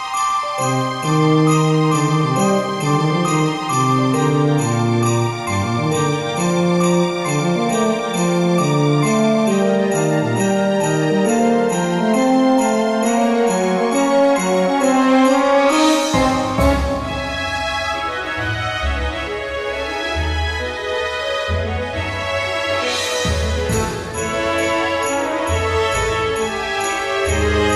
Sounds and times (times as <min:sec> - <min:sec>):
Music: 0:00.0 - 0:27.7.